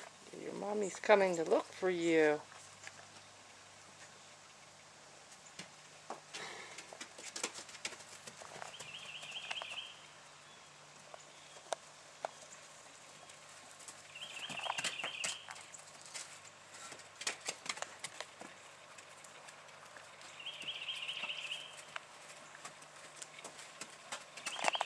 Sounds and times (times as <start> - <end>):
Clip-clop: 2.4 - 10.2, 10.9 - 24.8.